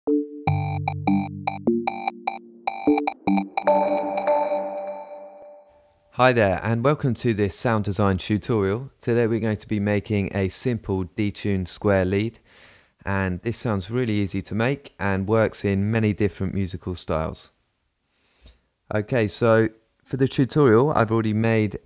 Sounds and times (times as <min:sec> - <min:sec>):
Electronic music: 0:00.1 - 0:05.8
Synthesizer: 0:00.1 - 0:05.8
Sonar: 0:01.9 - 0:05.8
Speech: 0:06.2 - 0:12.4, 0:13.0 - 0:17.6, 0:18.9 - 0:21.8.